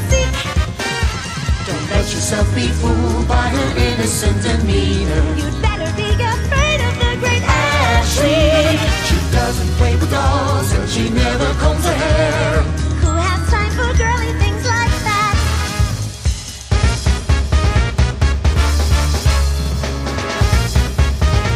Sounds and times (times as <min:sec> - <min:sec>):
Theme music: 0:00.0 - 0:21.5.